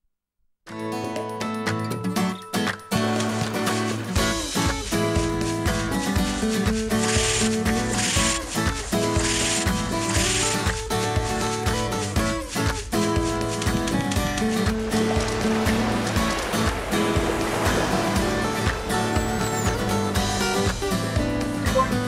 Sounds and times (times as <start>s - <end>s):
Music: 0.7s - 22.0s.